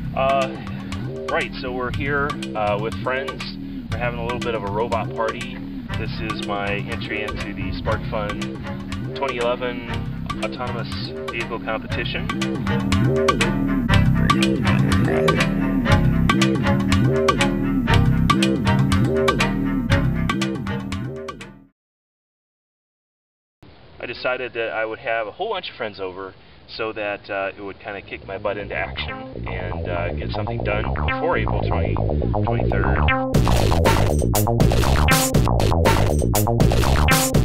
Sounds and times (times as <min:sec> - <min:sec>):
Music: 0:00.0 - 0:21.8, 0:28.6 - 0:37.4
Speech: 0:00.2 - 0:00.7, 0:01.3 - 0:08.4, 0:09.2 - 0:12.4, 0:14.2 - 0:15.5, 0:24.0 - 0:33.0.